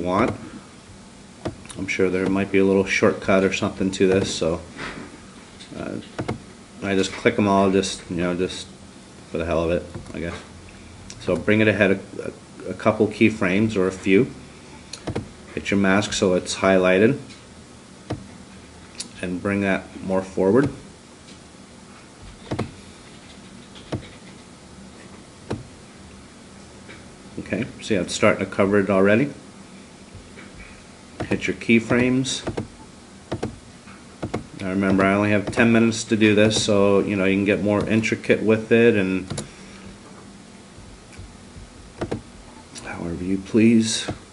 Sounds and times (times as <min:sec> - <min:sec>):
Speech: 0:00.0 - 0:00.5, 0:01.7 - 0:04.7, 0:05.7 - 0:06.1, 0:06.8 - 0:10.5, 0:11.2 - 0:14.4, 0:15.5 - 0:17.3, 0:19.0 - 0:20.8, 0:27.4 - 0:29.4, 0:31.2 - 0:32.5, 0:34.6 - 0:39.3, 0:42.8 - 0:44.2.